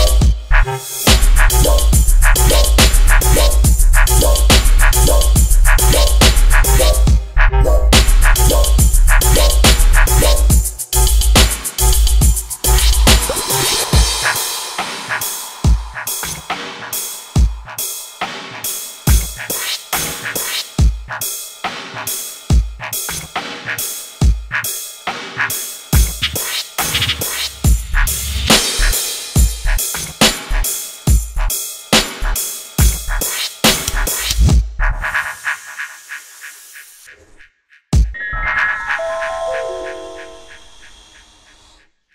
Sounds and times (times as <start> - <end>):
Dubstep: 0.0 - 20.6, 38.0 - 41.2.